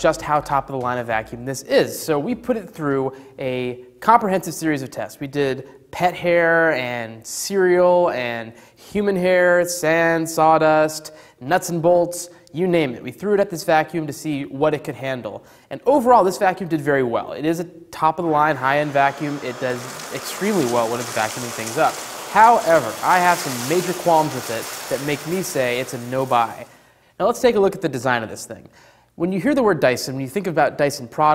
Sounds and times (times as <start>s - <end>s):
Speech: 0.0s - 31.3s.